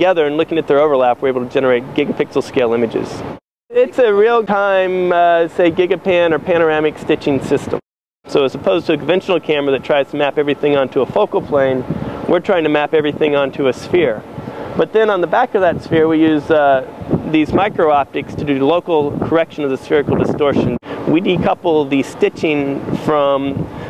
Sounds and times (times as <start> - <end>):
Speech: 0.0 - 14.2, 14.8 - 23.6.